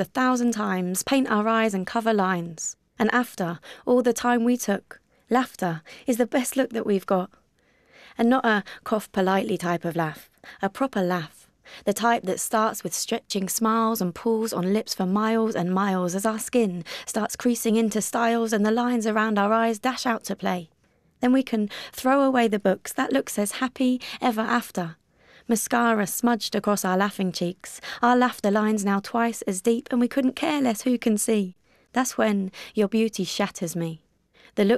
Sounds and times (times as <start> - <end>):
Speech: 0.0 - 7.4, 8.2 - 34.0, 34.6 - 34.7.